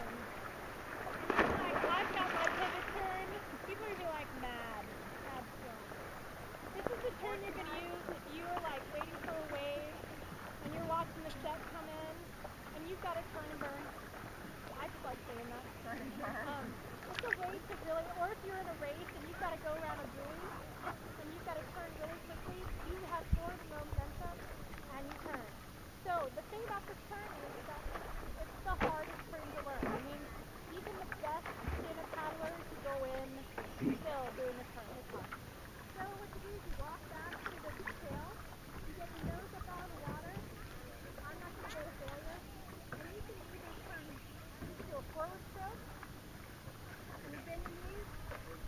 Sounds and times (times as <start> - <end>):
Speech: 1.6 - 5.9, 6.8 - 10.0, 10.6 - 12.2, 12.8 - 13.9, 14.7 - 20.6, 21.2 - 35.2, 36.0 - 40.4, 41.1 - 42.4, 43.0 - 45.8, 47.2 - 48.6.